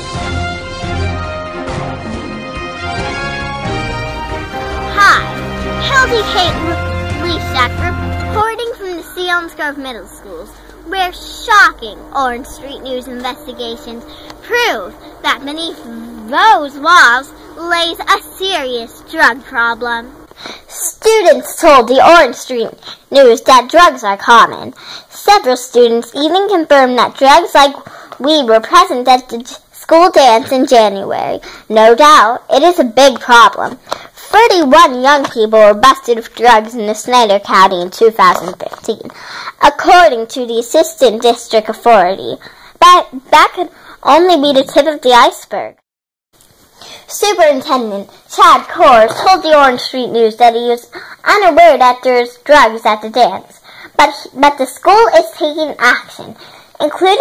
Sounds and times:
Speech: 0:05.8 - 0:20.1, 0:20.7 - 0:45.8, 0:47.1 - 0:57.2.

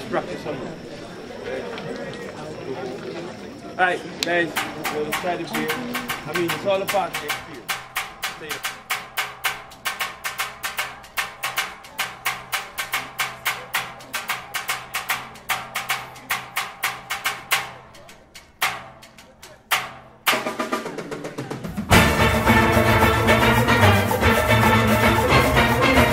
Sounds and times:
Music: 0:04.5 - 0:26.1.

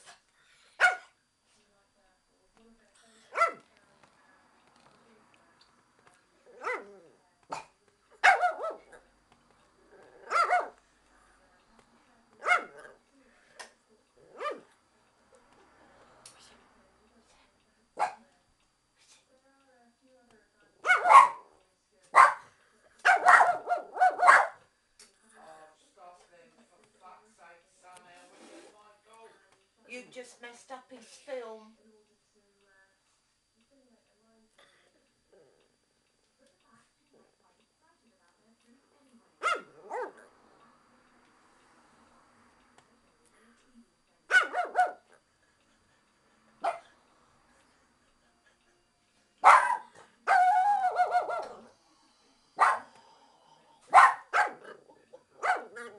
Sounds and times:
Bark: 0:00.8 - 0:01.2, 0:03.3 - 0:03.6, 0:06.6 - 0:09.0, 0:10.2 - 0:10.8, 0:12.4 - 0:13.0, 0:14.4 - 0:14.7, 0:18.0 - 0:18.2, 0:20.8 - 0:21.5, 0:22.1 - 0:24.6, 0:39.4 - 0:40.3, 0:44.3 - 0:45.1, 0:46.6 - 0:46.9, 0:49.4 - 0:51.7, 0:52.6 - 0:53.0, 0:53.9 - 0:55.9.

